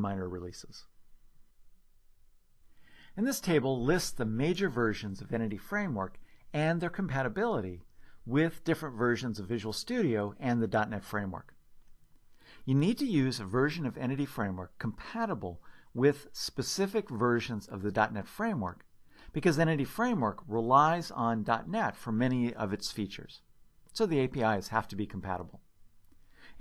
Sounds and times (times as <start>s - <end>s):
Narration, monologue: 0.0s - 26.6s.